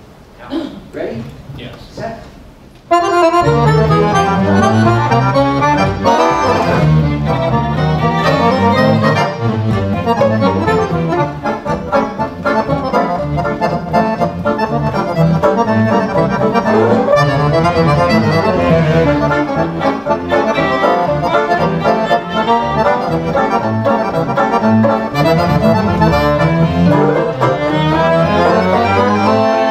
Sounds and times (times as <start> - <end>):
Violin, fiddle: 2.9 - 29.7.